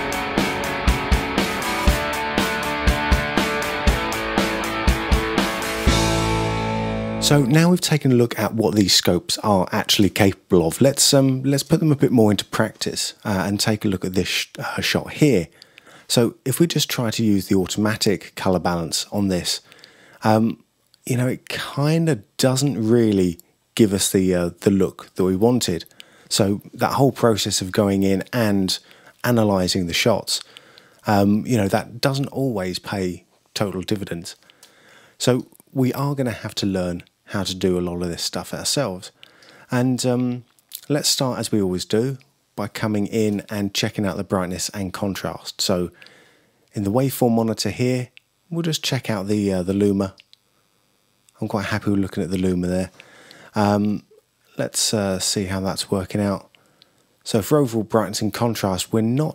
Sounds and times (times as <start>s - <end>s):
Speech: 7.2s - 34.4s, 35.2s - 46.0s, 46.7s - 50.2s, 51.4s - 56.6s, 57.2s - 59.3s.